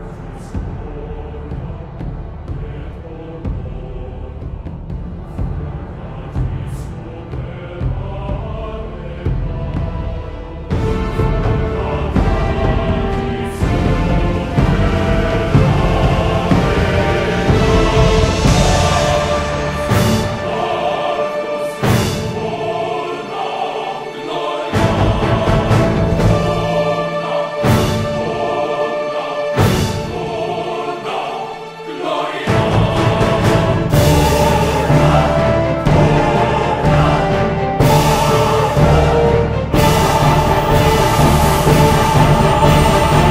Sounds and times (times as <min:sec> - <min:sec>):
Music: 0:00.0 - 0:43.3.